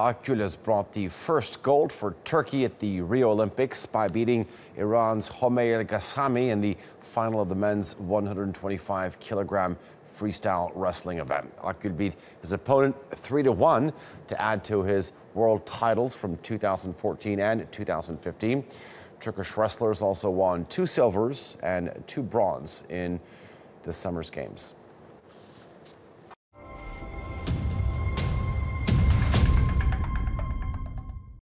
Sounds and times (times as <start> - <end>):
Speech: 0.0 - 23.2, 23.8 - 24.8
Music: 26.6 - 31.4.